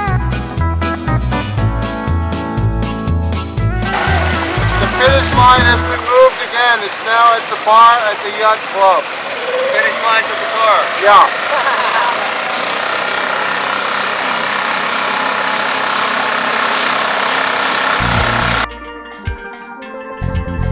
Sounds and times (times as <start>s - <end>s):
Boat, Water vehicle: 3.9s - 18.7s.